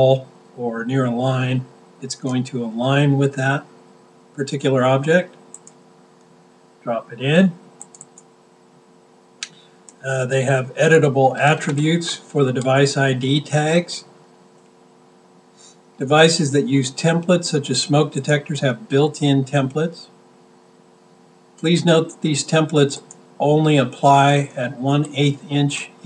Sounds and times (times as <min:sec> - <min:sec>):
Speech: 0:00.0 - 0:03.7, 0:04.4 - 0:05.4, 0:06.9 - 0:07.6, 0:10.0 - 0:14.1, 0:16.0 - 0:20.1, 0:21.6 - 0:26.0.